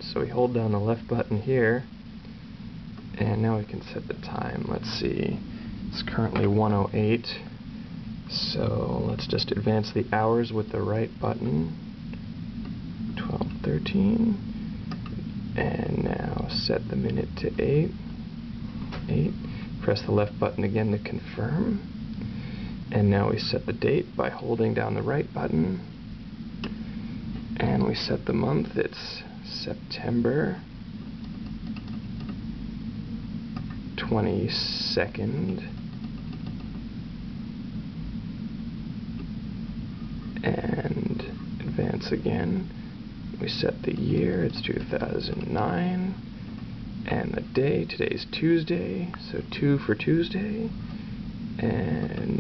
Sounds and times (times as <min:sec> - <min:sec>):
Speech: 0:00.0 - 0:01.9, 0:03.2 - 0:07.6, 0:08.3 - 0:11.8, 0:13.2 - 0:14.5, 0:15.6 - 0:18.0, 0:19.1 - 0:21.9, 0:22.9 - 0:25.9, 0:27.6 - 0:30.7, 0:34.0 - 0:35.8, 0:40.4 - 0:46.2, 0:47.0 - 0:50.8, 0:51.6 - 0:52.4.